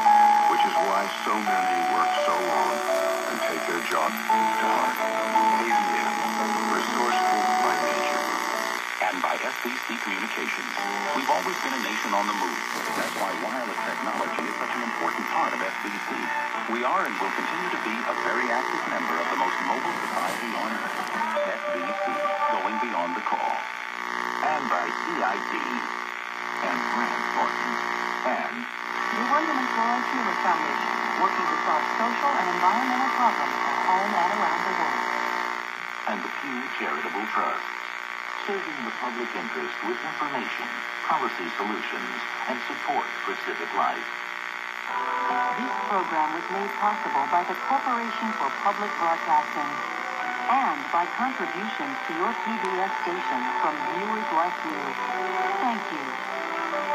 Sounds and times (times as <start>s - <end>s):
Hum: 0.0s - 56.9s.